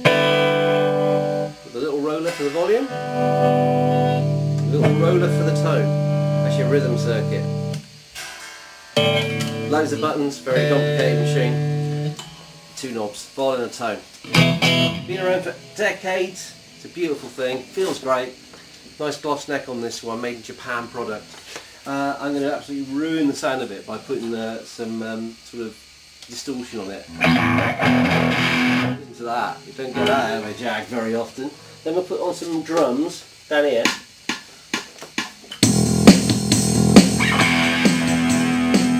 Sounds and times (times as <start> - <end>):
Music: 0.0 - 13.2, 14.2 - 18.5, 27.1 - 30.6, 33.8 - 38.9
Speech: 1.7 - 2.9, 4.7 - 7.6, 9.7 - 11.7, 12.8 - 14.1, 15.0 - 18.4, 19.0 - 21.3, 21.9 - 27.1, 29.0 - 34.0.